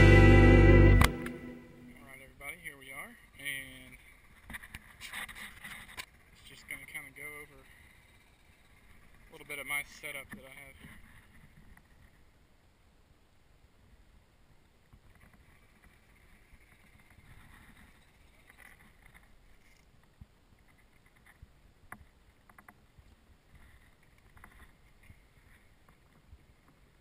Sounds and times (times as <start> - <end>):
Speech: 2.0 - 4.0, 6.4 - 7.7, 9.3 - 10.9.